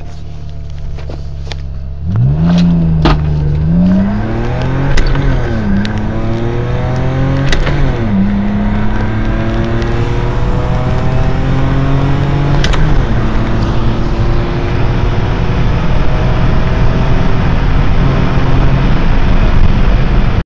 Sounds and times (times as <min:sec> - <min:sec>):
Car: 0:00.0 - 0:20.4
Medium engine (mid frequency): 0:00.0 - 0:20.4
Accelerating, revving, vroom: 0:02.0 - 0:20.4.